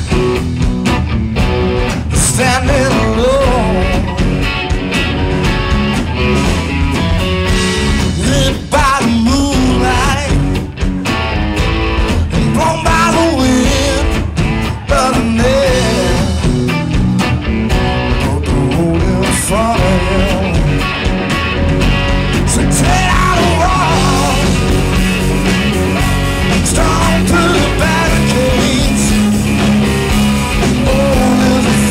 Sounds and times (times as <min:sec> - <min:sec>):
Rock music: 0:00.0 - 0:31.9.